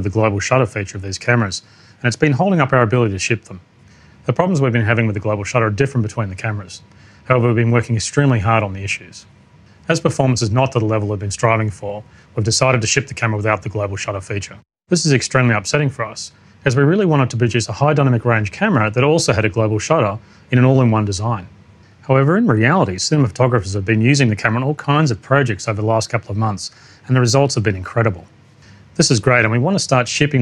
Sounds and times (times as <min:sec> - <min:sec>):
Speech: 0:00.0 - 0:03.6, 0:04.3 - 0:28.3, 0:29.0 - 0:30.4.